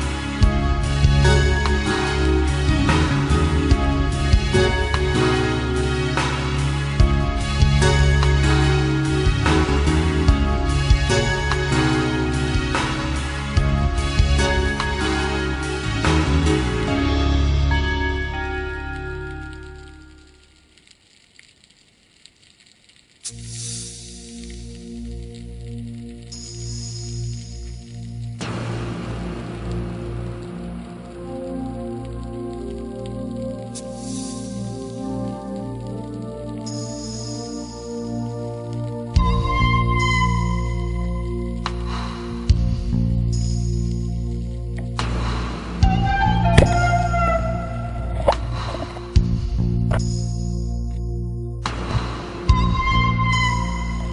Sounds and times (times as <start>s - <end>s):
Music: 0.0s - 54.1s.